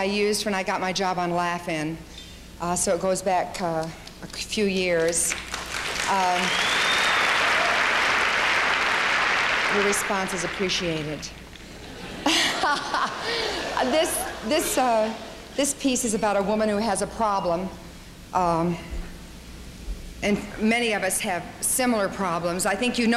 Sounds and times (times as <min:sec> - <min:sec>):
Narration, monologue: 0:00.0 - 0:06.5, 0:09.6 - 0:23.1.